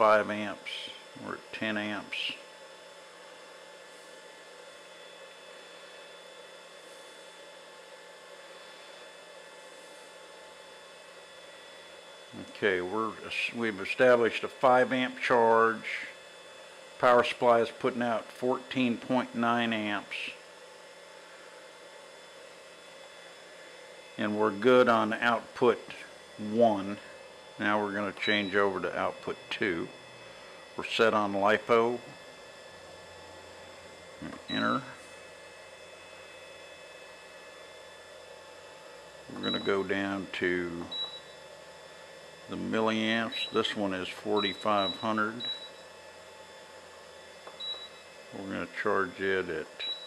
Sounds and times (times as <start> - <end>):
Speech: 0.0 - 2.4, 12.4 - 16.2, 17.0 - 20.4, 24.2 - 29.9, 30.8 - 32.1, 34.2 - 35.0, 39.3 - 40.9, 42.5 - 45.5, 48.4 - 49.8.